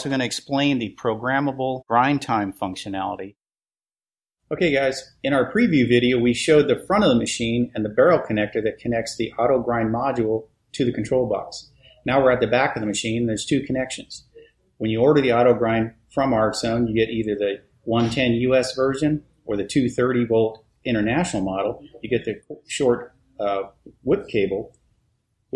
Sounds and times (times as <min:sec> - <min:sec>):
Speech: 0:00.0 - 0:03.4, 0:04.5 - 0:24.8.